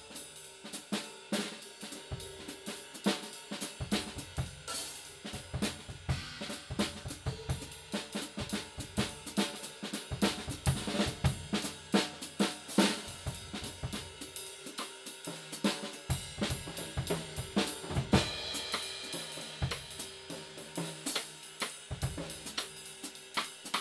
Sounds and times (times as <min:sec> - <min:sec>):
Drum kit: 0:00.0 - 0:23.8
Hi-hat: 0:00.0 - 0:23.8
Snare drum: 0:00.7 - 0:23.8
Bass drum: 0:05.3 - 0:09.4, 0:16.1 - 0:18.9.